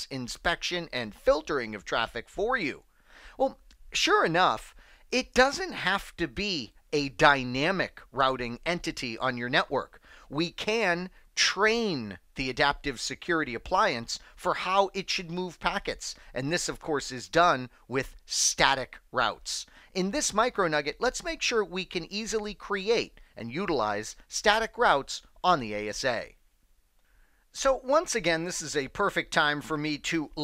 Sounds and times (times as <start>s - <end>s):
Speech: 0.0s - 26.4s, 27.6s - 30.4s.